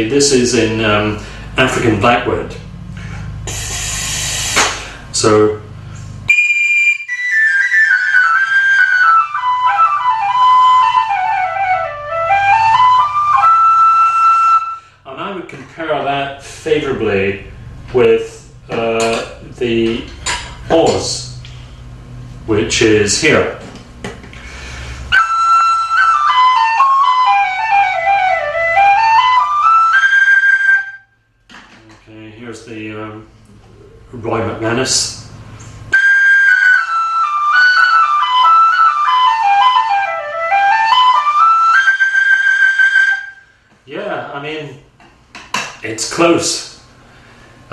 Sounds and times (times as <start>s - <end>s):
Speech: 0.0s - 2.6s, 5.2s - 5.7s, 15.1s - 20.1s, 20.7s - 21.4s, 22.5s - 23.7s, 31.8s - 35.3s, 43.9s - 44.9s, 45.8s - 46.8s.